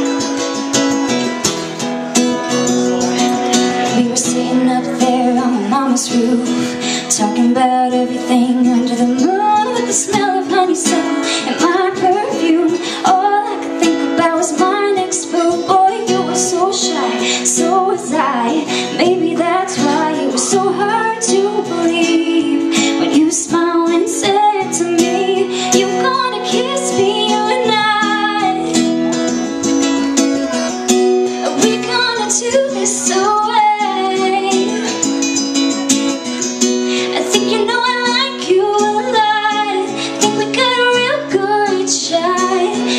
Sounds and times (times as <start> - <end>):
Music: 0.0 - 42.9
Female singing: 3.8 - 28.8, 31.4 - 35.0, 37.1 - 42.9.